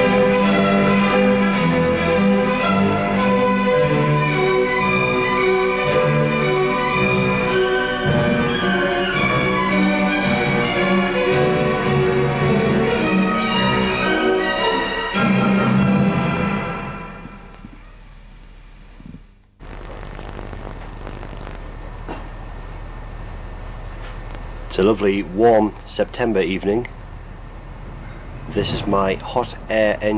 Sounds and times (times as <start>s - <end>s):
Music: 0.0s - 17.8s.